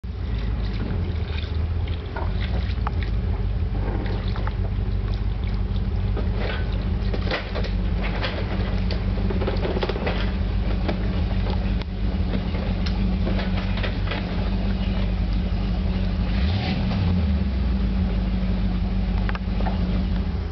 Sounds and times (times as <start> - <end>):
Boat, Water vehicle: 0.0 - 20.5.